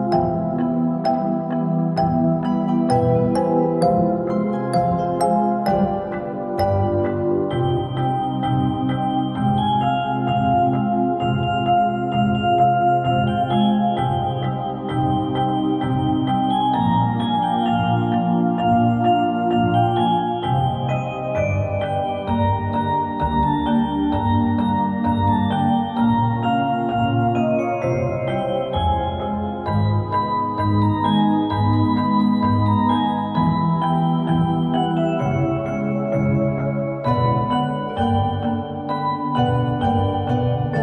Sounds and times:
Music: 0.0s - 40.8s.

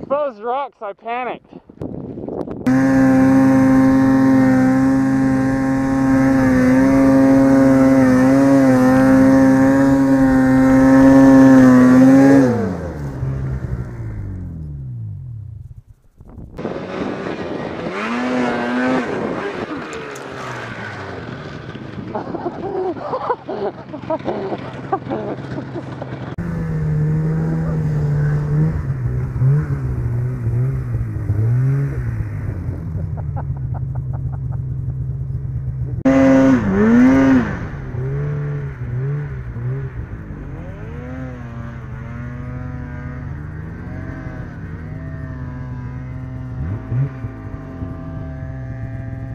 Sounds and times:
Outside, rural or natural: 0.0s - 49.3s
Vehicle: 1.5s - 49.3s
Rumble: 1.6s - 49.3s.

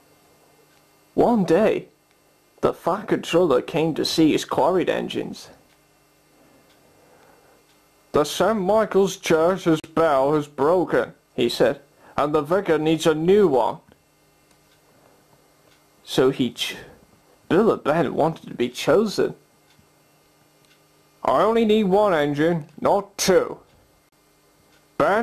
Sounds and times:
Speech: 1.2s - 1.9s, 2.6s - 5.6s, 8.1s - 13.9s, 16.0s - 19.4s, 21.2s - 23.7s, 25.0s - 25.2s.

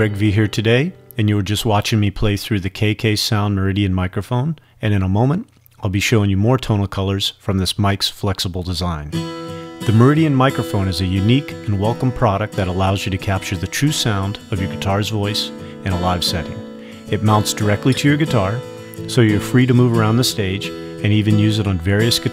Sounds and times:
Acoustic guitar: 0.0s - 2.4s, 9.1s - 22.3s
Speech: 0.0s - 9.2s, 9.9s - 22.3s.

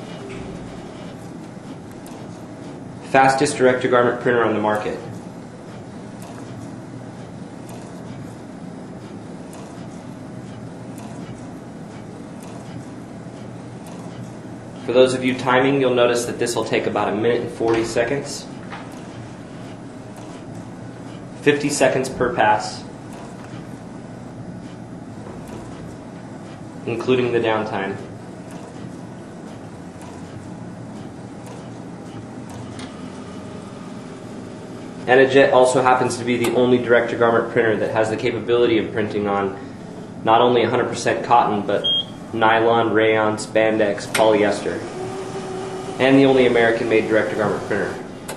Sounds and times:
Printer: 0.0s - 48.3s
Speech: 3.1s - 5.2s, 14.9s - 18.6s, 21.4s - 22.9s, 26.9s - 28.1s, 35.1s - 39.6s, 40.2s - 44.9s, 46.0s - 48.1s.

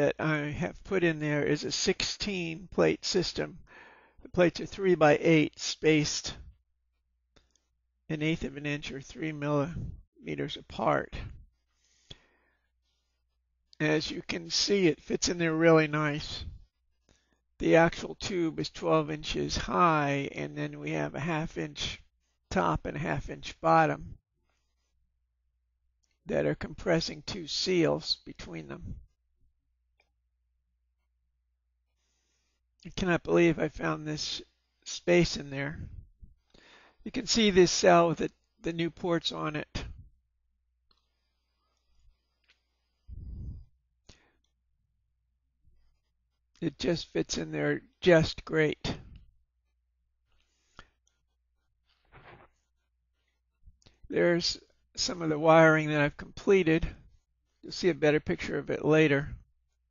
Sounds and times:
Speech: 0.0s - 3.6s, 4.3s - 6.5s, 8.1s - 11.4s, 13.8s - 16.6s, 17.6s - 24.2s, 26.3s - 29.0s, 32.8s - 36.0s, 37.1s - 40.0s, 46.6s - 49.1s, 54.1s - 57.0s, 57.7s - 59.4s.

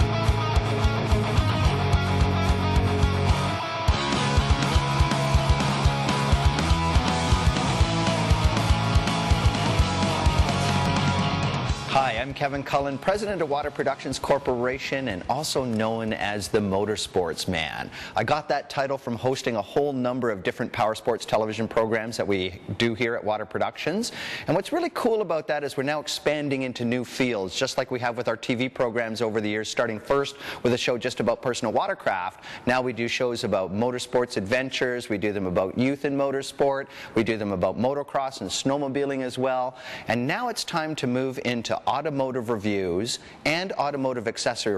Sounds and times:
Speech: 11.9s - 44.7s.

